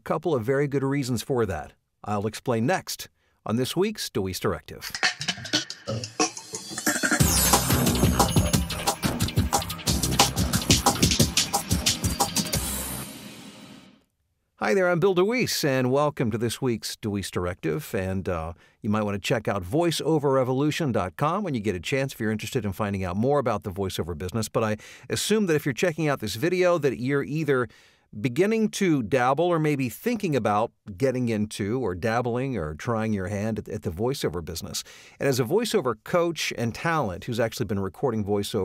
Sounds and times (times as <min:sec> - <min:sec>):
Speech: 0:00.0 - 0:05.0, 0:14.6 - 0:38.6
Music: 0:04.9 - 0:14.0.